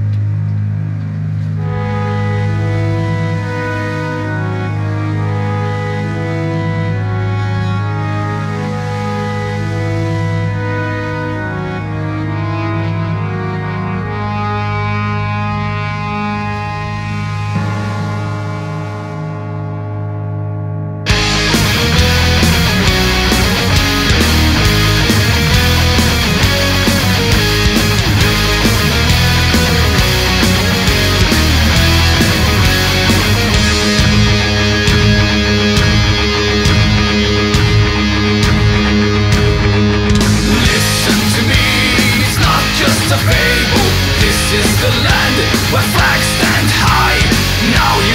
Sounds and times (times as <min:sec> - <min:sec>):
Music: 0:00.0 - 0:48.1.